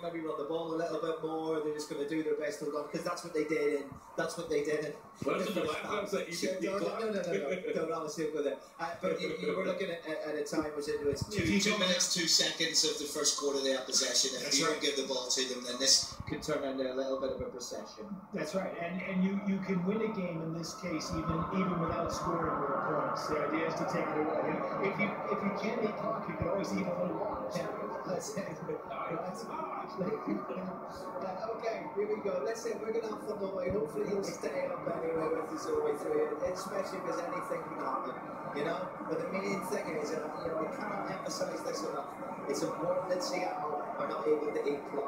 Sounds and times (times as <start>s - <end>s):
Speech: 0.0s - 45.0s.